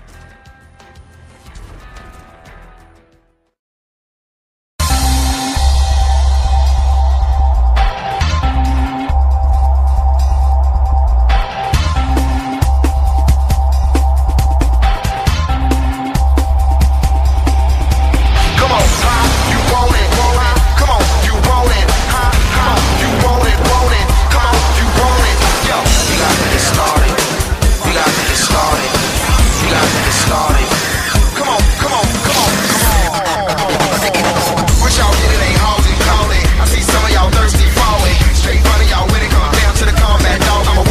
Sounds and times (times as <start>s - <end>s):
Music: 0.0s - 3.6s, 4.8s - 40.9s.